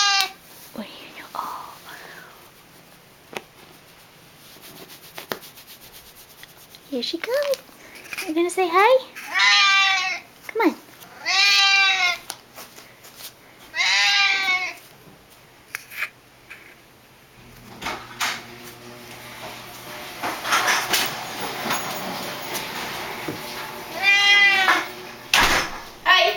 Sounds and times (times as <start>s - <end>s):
Speech: 6.9s - 7.6s, 8.2s - 9.1s, 10.5s - 10.8s, 26.0s - 26.3s.